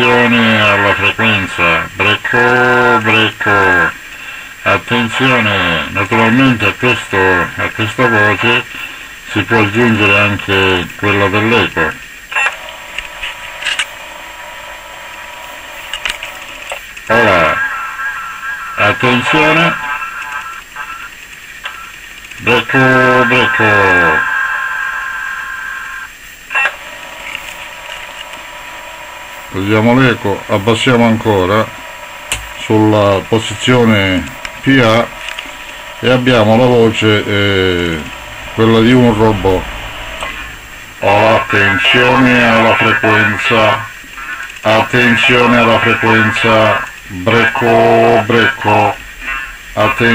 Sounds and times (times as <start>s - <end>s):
Speech: 0.0s - 4.0s, 4.6s - 8.7s, 9.3s - 12.0s, 17.1s - 21.1s, 22.4s - 24.4s, 29.5s - 31.8s, 32.6s - 35.1s, 36.0s - 39.7s, 41.0s - 44.0s, 44.6s - 49.0s, 49.8s - 50.1s
Radio: 0.0s - 50.1s.